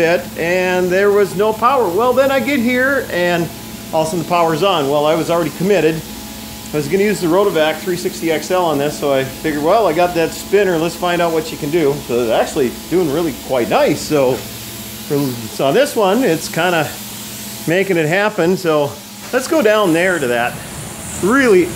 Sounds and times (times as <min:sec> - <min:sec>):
Speech: 0:00.0 - 0:06.1, 0:06.7 - 0:14.4, 0:15.1 - 0:17.0, 0:17.7 - 0:20.6, 0:21.2 - 0:21.7.